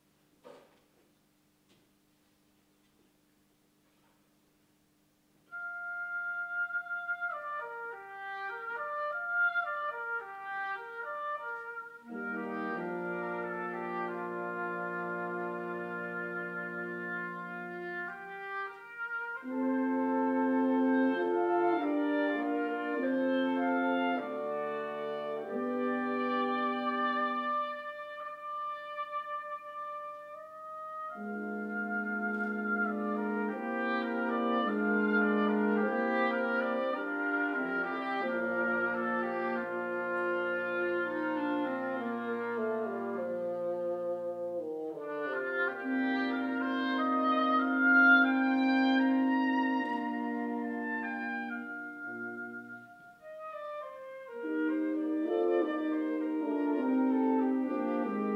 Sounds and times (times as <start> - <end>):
Music: 0.0 - 58.3.